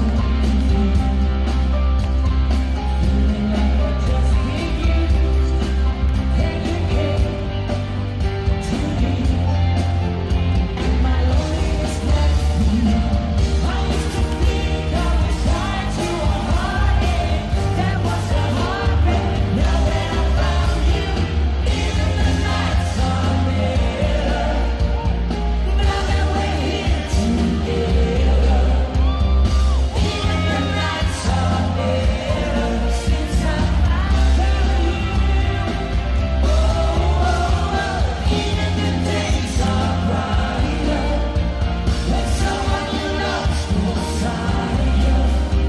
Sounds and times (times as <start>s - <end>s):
Rock and roll: 0.0s - 45.6s
Singing: 0.0s - 45.6s.